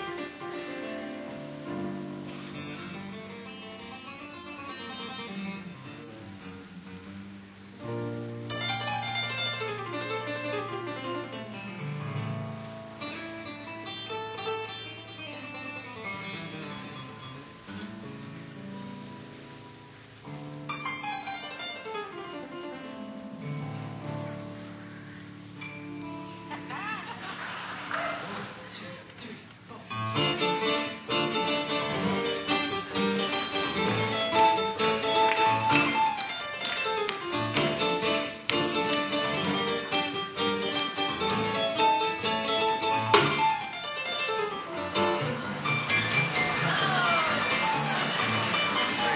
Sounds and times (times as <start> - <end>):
Music: 0.0 - 27.2, 29.9 - 49.1.